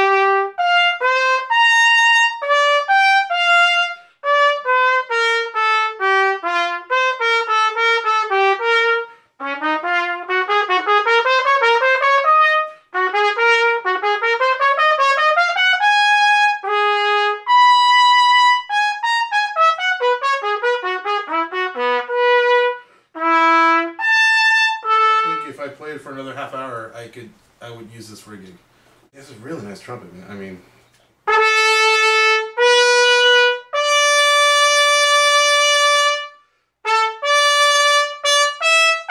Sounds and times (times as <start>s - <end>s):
Trumpet: 0.0s - 27.2s, 31.2s - 39.1s
Speech: 25.2s - 28.6s, 29.2s - 30.7s.